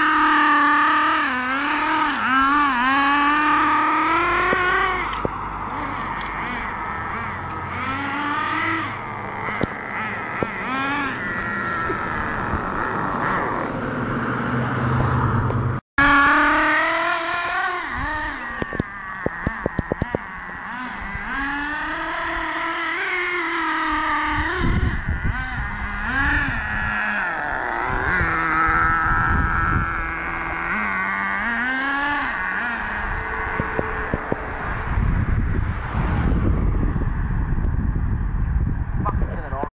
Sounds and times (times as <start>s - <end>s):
Car: 0.0s - 39.7s.